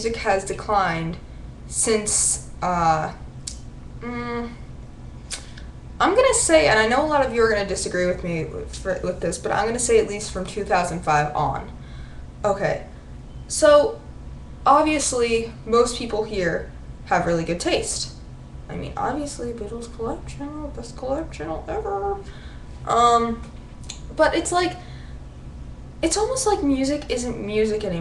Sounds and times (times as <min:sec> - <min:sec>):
Speech: 0:00.0 - 0:03.2, 0:04.0 - 0:04.6, 0:06.0 - 0:11.8, 0:12.4 - 0:12.9, 0:13.5 - 0:14.0, 0:14.7 - 0:22.3, 0:22.9 - 0:24.8, 0:26.0 - 0:28.0.